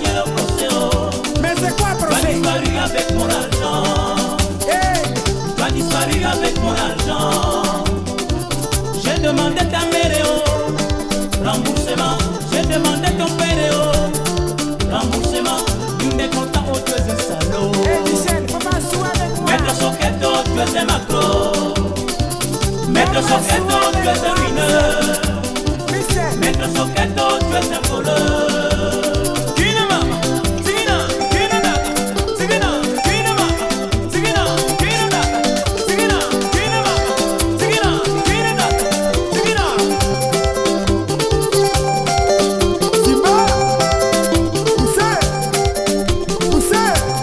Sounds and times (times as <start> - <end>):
Music of Africa: 0.0 - 47.2.